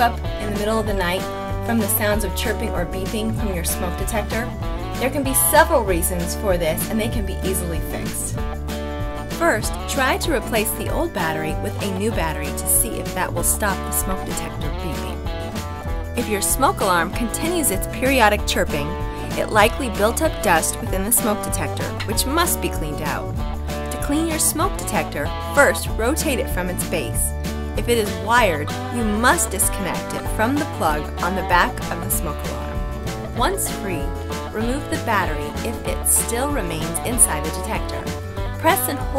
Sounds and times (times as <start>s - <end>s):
Speech: 0.0s - 8.4s, 9.3s - 15.2s, 16.2s - 23.3s, 23.9s - 32.7s, 33.3s - 39.1s
Music: 0.0s - 39.1s.